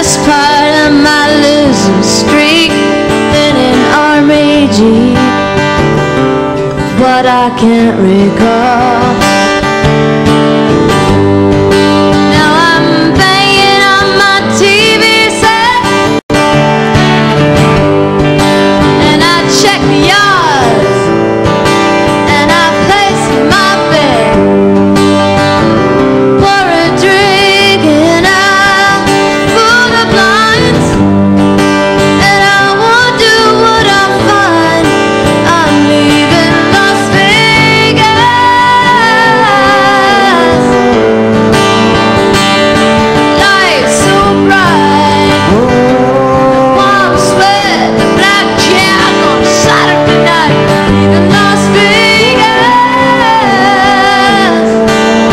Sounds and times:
Music: 0.0s - 55.3s.

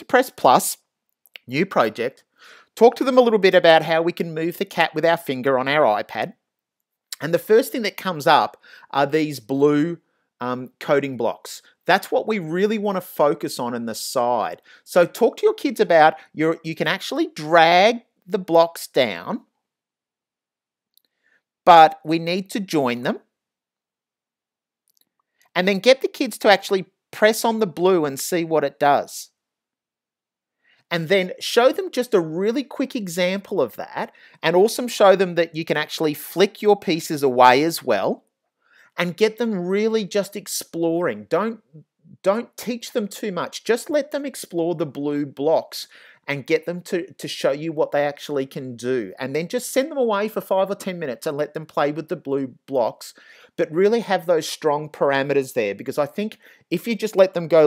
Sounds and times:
Speech: 0.0s - 0.8s, 1.4s - 2.2s, 2.8s - 6.4s, 7.2s - 19.5s, 21.7s - 23.3s, 25.6s - 29.4s, 30.9s - 38.2s, 39.0s - 57.6s.

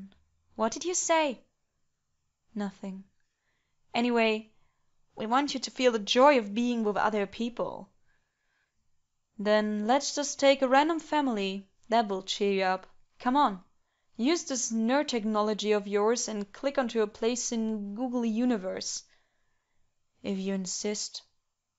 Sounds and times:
Speech: 0.0s - 1.4s, 2.6s - 3.1s, 4.0s - 4.5s, 5.2s - 7.9s, 9.4s - 13.6s, 14.2s - 19.0s, 20.2s - 21.3s.

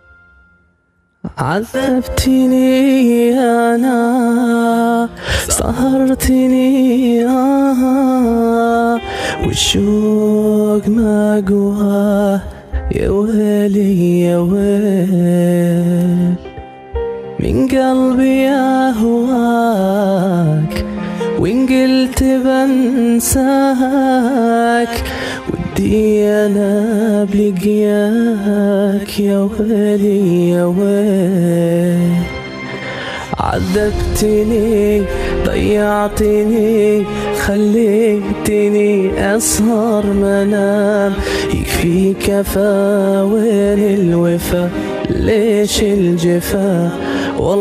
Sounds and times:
Music: 0.0s - 47.6s.

